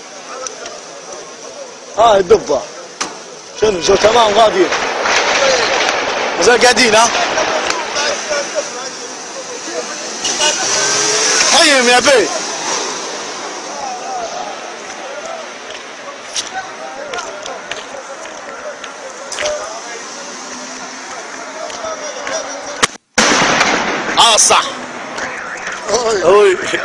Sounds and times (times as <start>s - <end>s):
Speech: 0.2s - 4.7s, 6.4s - 12.7s, 13.7s - 22.8s, 24.2s - 26.8s.